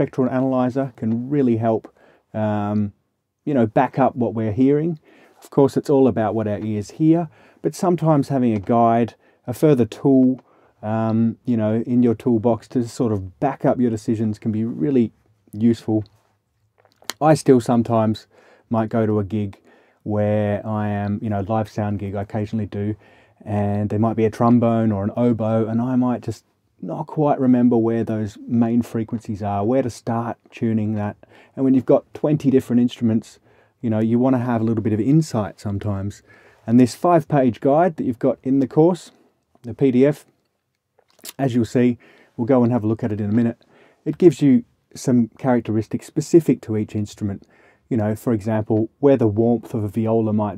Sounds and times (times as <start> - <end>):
Speech: 0.0 - 16.2, 16.9 - 40.4, 41.2 - 50.5.